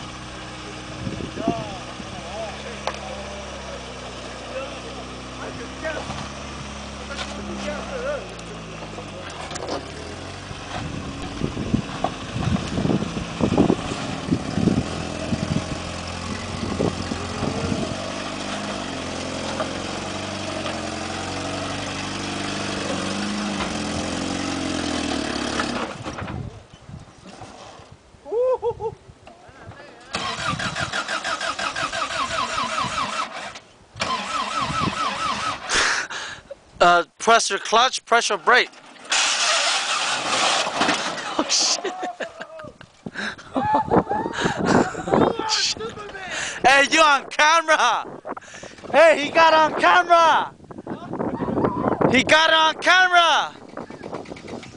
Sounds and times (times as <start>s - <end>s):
Medium engine (mid frequency): 0.0s - 28.3s, 29.1s - 37.0s, 38.0s - 54.7s
Car: 0.0s - 28.4s, 29.1s - 54.7s
Accelerating, revving, vroom: 2.2s - 8.5s, 9.4s - 26.1s.